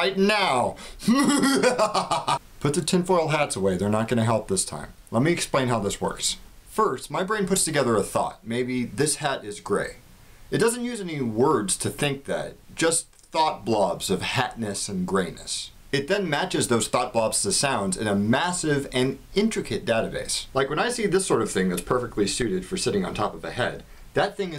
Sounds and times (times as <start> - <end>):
Speech: 0.0 - 0.8, 2.6 - 24.5.